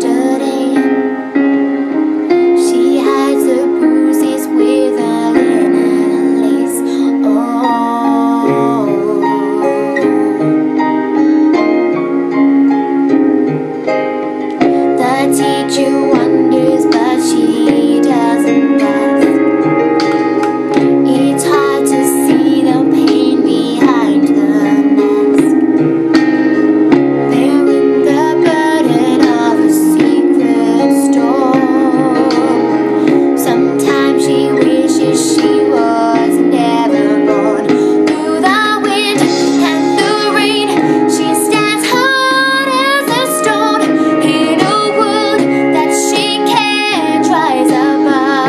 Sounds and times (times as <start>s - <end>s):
Female singing: 0.0s - 1.1s, 2.6s - 10.6s, 14.9s - 19.4s, 21.0s - 25.6s, 27.3s - 48.4s
Music: 0.0s - 48.4s.